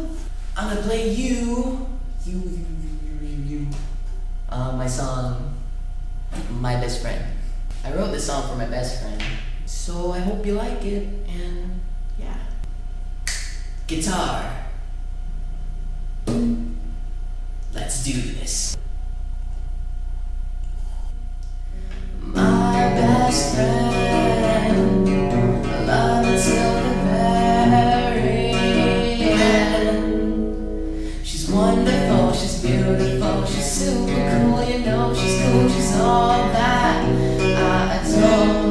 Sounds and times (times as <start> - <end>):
Male singing: 0.0 - 3.8, 22.2 - 30.3, 31.3 - 38.7
Speech: 0.0 - 3.8, 4.5 - 5.6, 6.4 - 12.6, 13.9 - 14.8, 17.7 - 18.8
Music: 22.1 - 38.7.